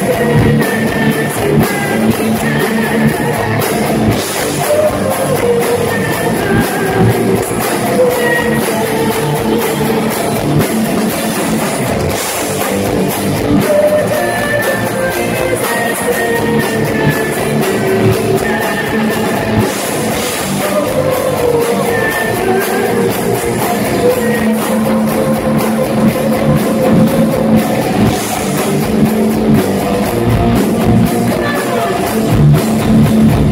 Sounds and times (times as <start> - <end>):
Singing: 0.0 - 11.3, 13.4 - 28.6, 30.8 - 32.4
Crowd: 0.0 - 33.5
Inside, large room or hall: 0.0 - 33.5
Music: 0.0 - 33.5.